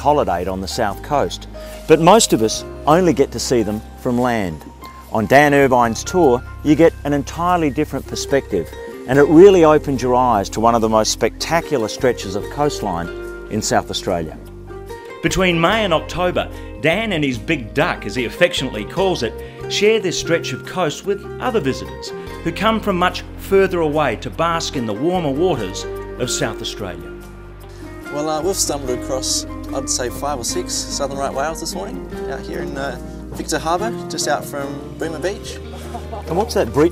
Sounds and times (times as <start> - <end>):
Speech: 0.0 - 14.4, 15.2 - 27.1, 28.1 - 35.6, 36.3 - 36.9
Music: 0.0 - 36.9.